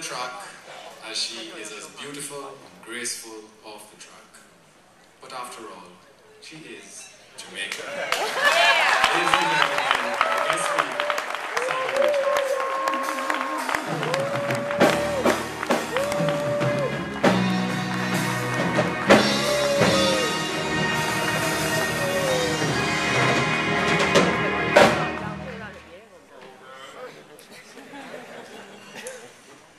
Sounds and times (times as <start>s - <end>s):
Male speech, man speaking: 0.0s - 4.5s, 5.2s - 8.1s, 9.0s - 11.2s, 26.3s - 27.7s
Music: 13.0s - 25.8s
Female speech, woman speaking: 25.2s - 26.4s.